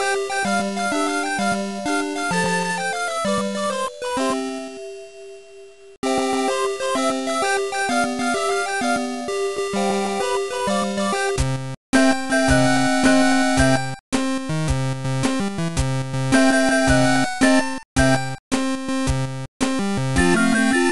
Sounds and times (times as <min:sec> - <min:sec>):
Video game music: 0:00.0 - 0:20.9.